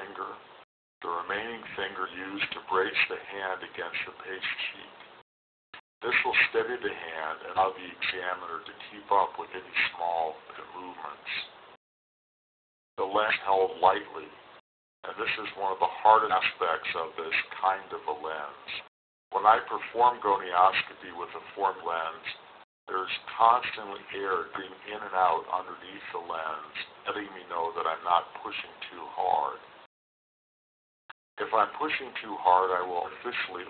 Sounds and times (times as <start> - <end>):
Speech: 0.0 - 5.0, 6.0 - 11.6, 13.0 - 14.4, 15.0 - 29.7, 31.4 - 33.7.